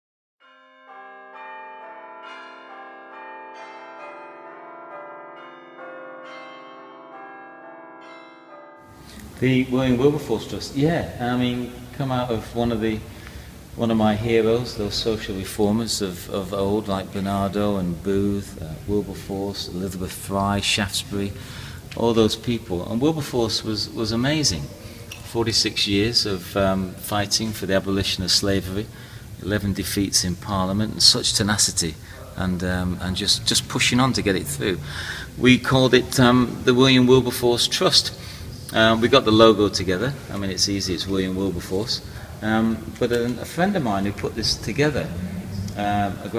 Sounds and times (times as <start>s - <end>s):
Church bell: 0.4s - 12.8s
Inside, large room or hall: 8.9s - 46.3s
Speech: 9.4s - 13.1s, 13.8s - 21.4s, 22.0s - 34.8s, 35.4s - 46.3s.